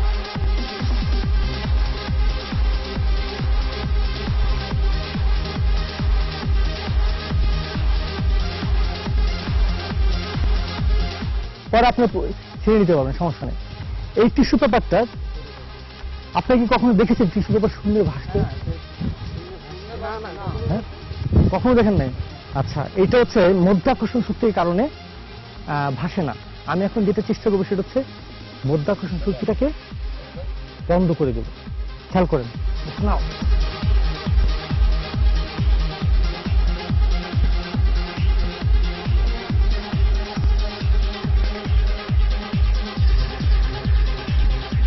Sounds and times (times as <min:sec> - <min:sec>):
Music: 0:00.0 - 0:44.8.